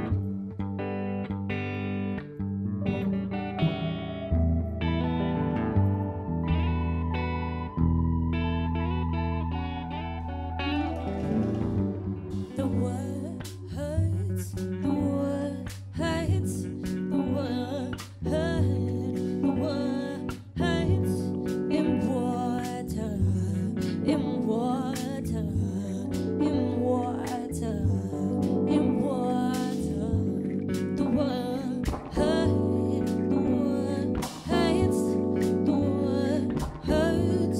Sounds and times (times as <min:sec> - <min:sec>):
Music: 0:00.0 - 0:37.5.